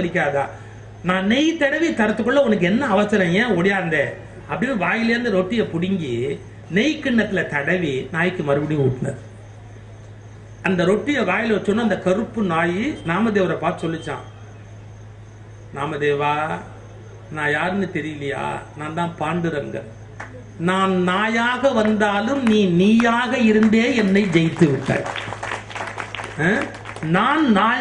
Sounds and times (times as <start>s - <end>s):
Male speech, man speaking: 0.0s - 9.2s, 10.7s - 14.4s, 15.8s - 20.0s, 20.6s - 25.1s, 26.4s - 27.8s
Narration, monologue: 0.0s - 25.3s, 26.3s - 27.8s.